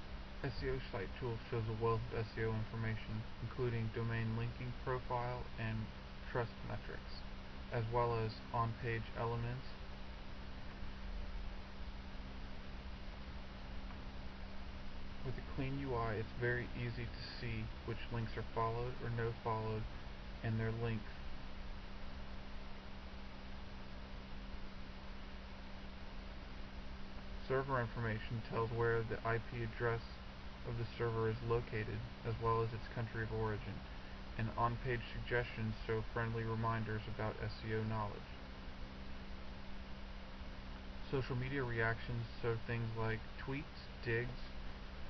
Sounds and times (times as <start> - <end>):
Speech: 0.4 - 9.8, 15.2 - 21.1, 27.4 - 38.4, 41.0 - 44.6.